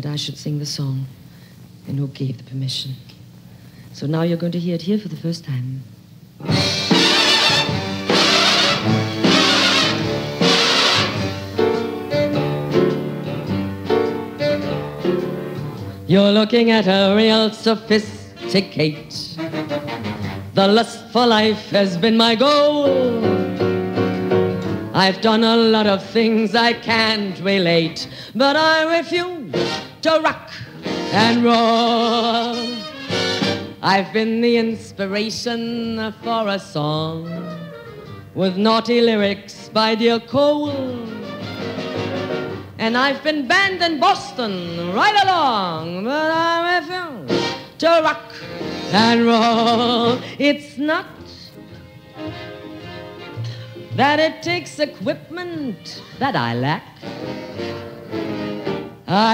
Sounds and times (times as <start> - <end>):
Rock and roll: 6.4 - 16.2, 22.4 - 26.2, 29.2 - 33.8, 39.6 - 42.8, 47.1 - 50.3, 57.0 - 59.3.